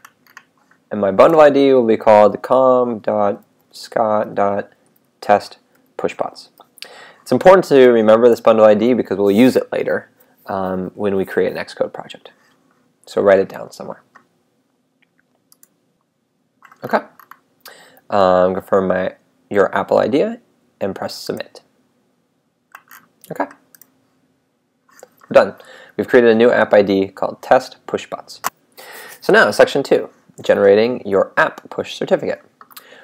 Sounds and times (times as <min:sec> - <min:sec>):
Speech: 0:00.9 - 0:06.6, 0:07.2 - 0:12.4, 0:13.1 - 0:14.1, 0:16.8 - 0:17.2, 0:18.1 - 0:21.7, 0:23.3 - 0:23.6, 0:25.3 - 0:28.5, 0:29.2 - 0:32.5.